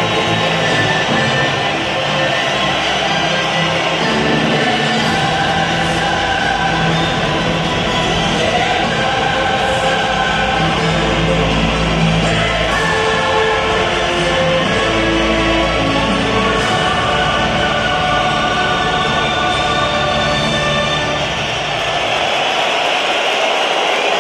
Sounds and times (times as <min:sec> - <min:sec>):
Music: 0:00.0 - 0:24.2.